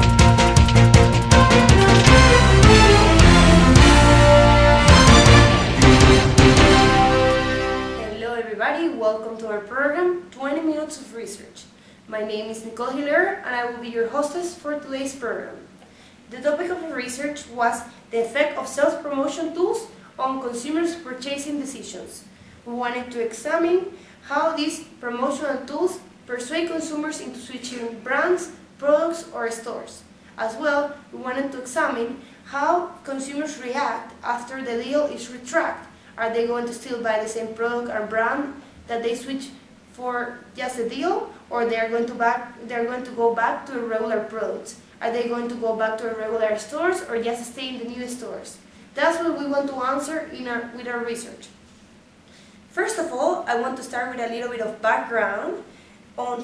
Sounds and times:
Speech: 0:08.0 - 0:15.7, 0:16.3 - 0:51.6, 0:52.7 - 0:56.4.

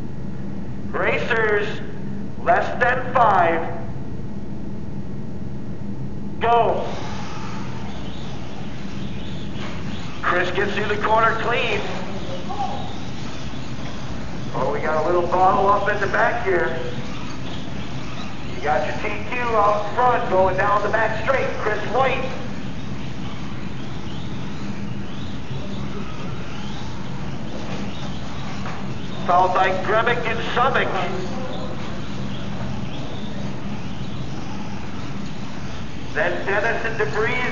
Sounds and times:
Inside, large room or hall: 0:00.0 - 0:37.5
Speech: 0:00.9 - 0:03.9, 0:10.2 - 0:13.0, 0:14.6 - 0:17.0, 0:18.6 - 0:22.5, 0:29.2 - 0:31.8, 0:36.2 - 0:37.5.

